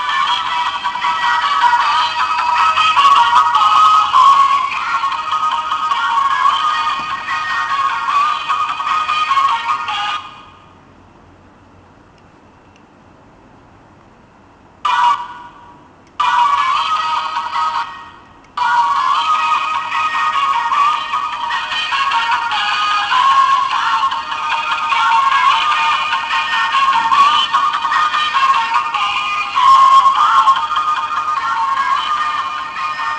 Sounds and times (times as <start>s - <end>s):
Music: 0.0s - 10.7s, 14.9s - 33.1s.